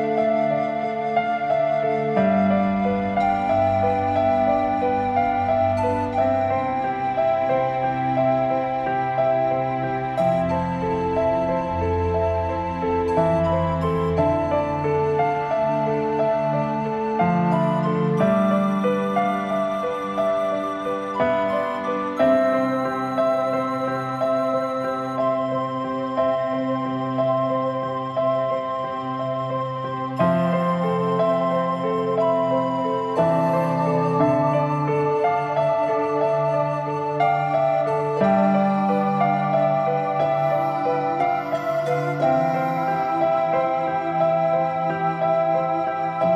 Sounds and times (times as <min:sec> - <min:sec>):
New-age music: 0:00.0 - 0:46.3.